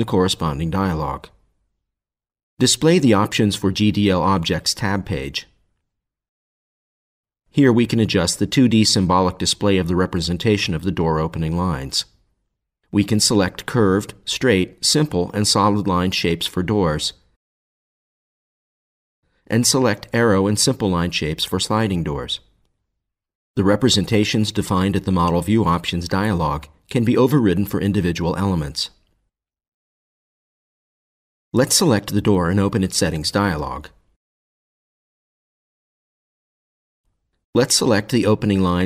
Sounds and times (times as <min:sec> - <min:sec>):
Speech: 0:00.0 - 0:01.4, 0:02.6 - 0:05.6, 0:07.5 - 0:12.2, 0:12.9 - 0:17.3, 0:19.5 - 0:22.5, 0:23.6 - 0:29.1, 0:31.6 - 0:34.0, 0:37.6 - 0:38.8.